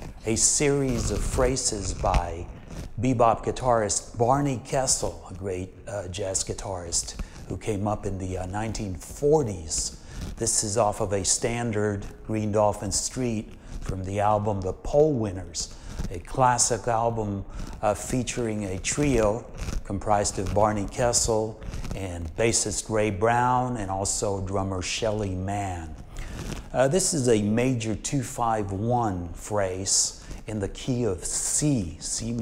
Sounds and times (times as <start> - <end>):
Speech: 0.2 - 32.4.